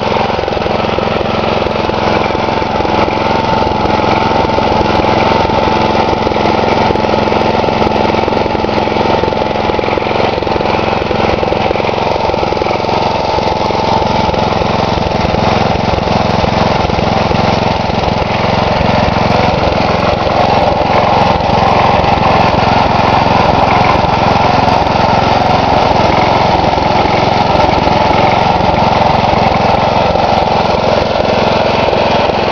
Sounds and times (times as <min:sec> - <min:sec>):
Idling: 0:00.0 - 0:32.5.